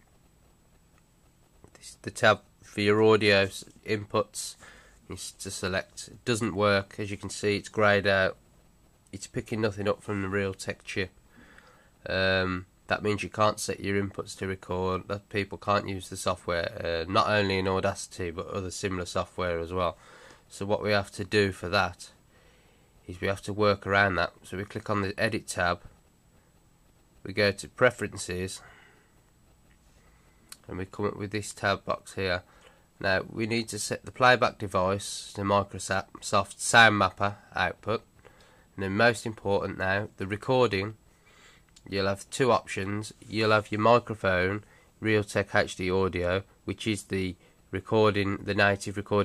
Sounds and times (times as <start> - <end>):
Speech: 1.7 - 8.4, 9.1 - 11.2, 12.0 - 22.2, 23.0 - 25.9, 27.2 - 28.7, 30.6 - 38.1, 38.8 - 41.0, 41.8 - 49.2.